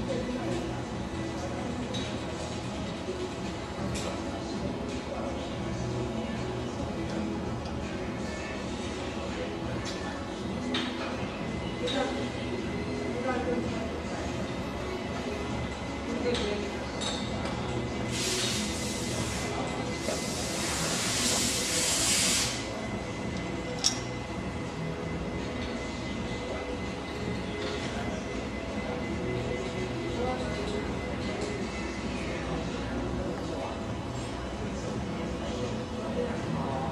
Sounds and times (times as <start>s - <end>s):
Music: 0.0s - 36.9s.